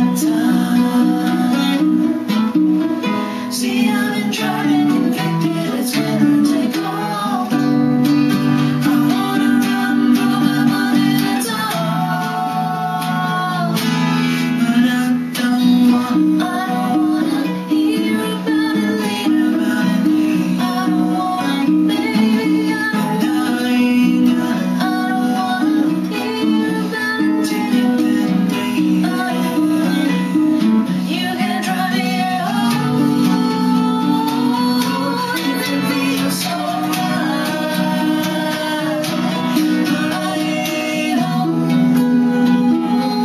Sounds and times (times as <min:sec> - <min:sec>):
Guitar: 0:00.0 - 0:43.2
Singing: 0:00.0 - 0:43.2.